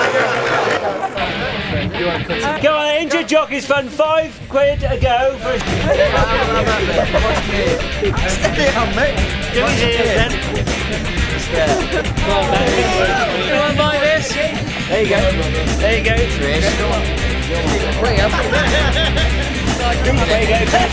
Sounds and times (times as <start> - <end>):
Speech: 0.0 - 18.6, 19.7 - 20.9
Music: 0.8 - 20.9.